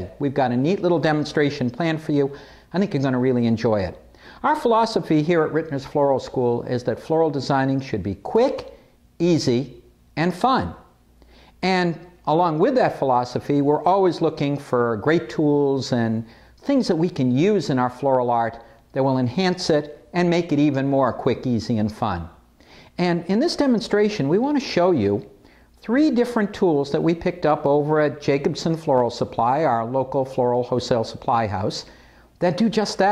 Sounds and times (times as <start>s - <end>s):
Speech: 0.0s - 10.9s, 11.6s - 22.4s, 23.0s - 33.1s.